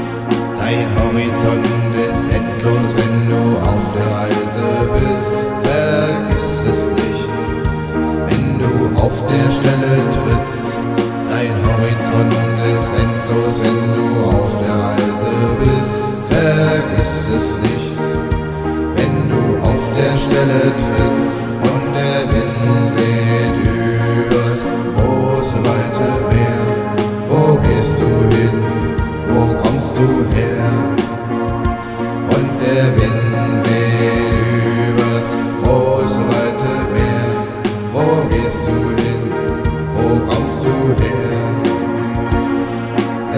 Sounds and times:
Music: 0.0s - 43.3s.

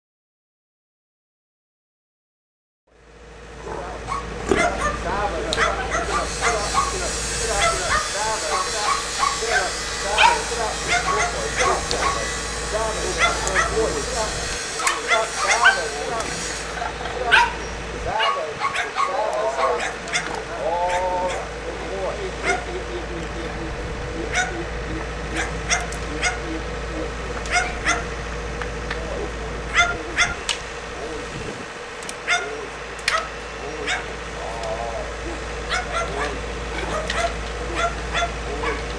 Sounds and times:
Outside, urban or manmade: 2.9s - 38.9s
Speech: 4.9s - 16.4s, 17.0s - 27.4s, 29.0s - 30.4s, 31.0s - 31.4s, 33.6s - 38.9s.

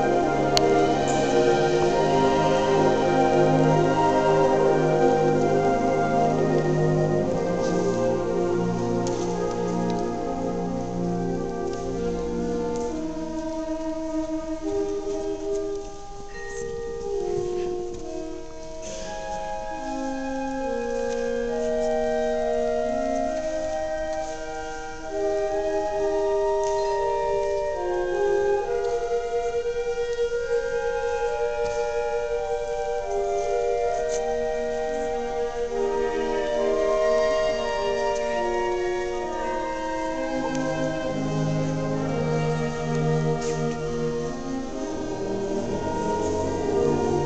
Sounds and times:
Orchestra: 0.0s - 47.2s.

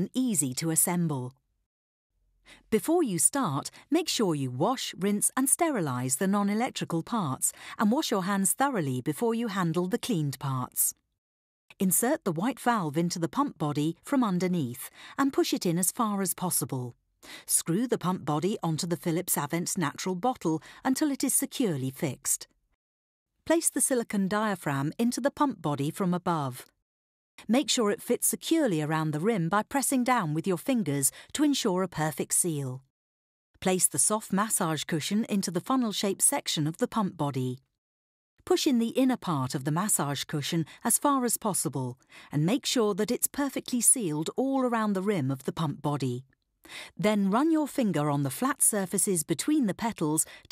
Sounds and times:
Speech: 0.0s - 1.4s, 2.7s - 11.0s, 11.7s - 22.5s, 23.5s - 26.7s, 27.4s - 32.9s, 33.6s - 37.6s, 38.5s - 46.3s, 47.0s - 50.5s.

